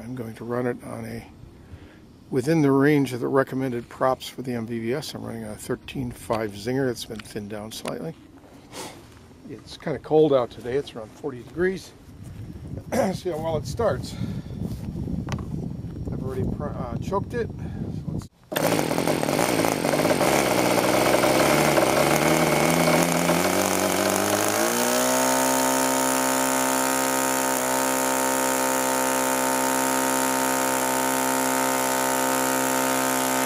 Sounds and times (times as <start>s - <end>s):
Speech: 0.0s - 1.3s, 2.3s - 8.2s, 9.5s - 12.0s, 12.8s - 14.2s, 16.1s - 18.3s
Engine starting: 18.5s - 27.8s
Idling: 18.6s - 33.4s.